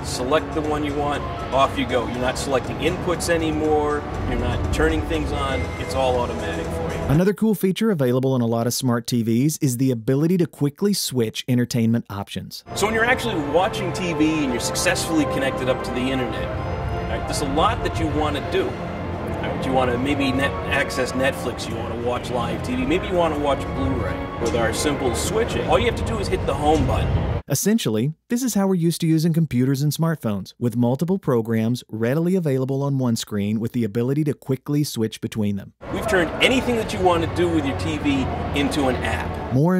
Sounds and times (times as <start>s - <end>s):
Music: 0.0s - 7.4s, 12.6s - 27.5s, 35.8s - 39.7s
Speech: 0.0s - 16.5s, 17.1s - 18.7s, 19.4s - 39.7s.